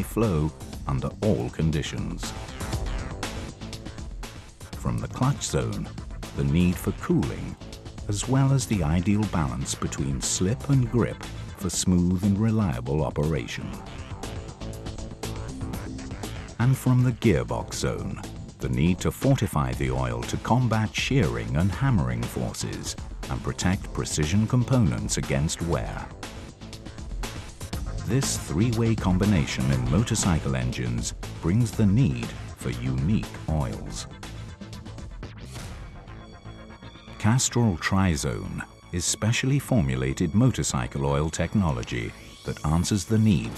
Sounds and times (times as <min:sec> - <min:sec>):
Speech: 0:00.0 - 0:02.4, 0:04.8 - 0:13.8, 0:16.6 - 0:26.1, 0:28.1 - 0:34.1, 0:37.2 - 0:43.5
Music: 0:00.0 - 0:43.5.